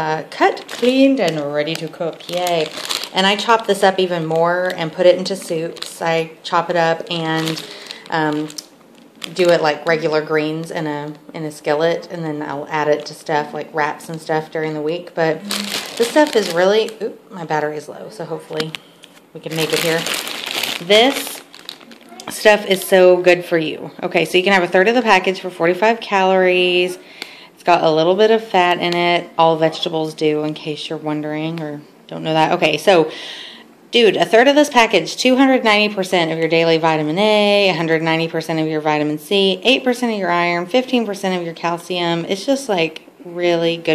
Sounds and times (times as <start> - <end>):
Speech: 0.0 - 8.6, 9.3 - 18.8, 19.4 - 20.1, 20.8 - 21.4, 22.0 - 27.0, 27.6 - 33.1, 34.0 - 43.9.